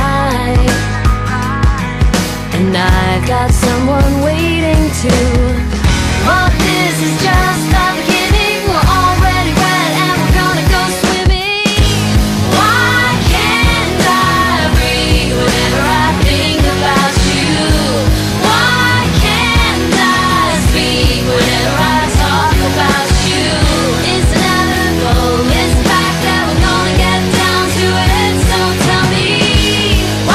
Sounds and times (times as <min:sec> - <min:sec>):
Punk rock: 0:00.0 - 0:30.3.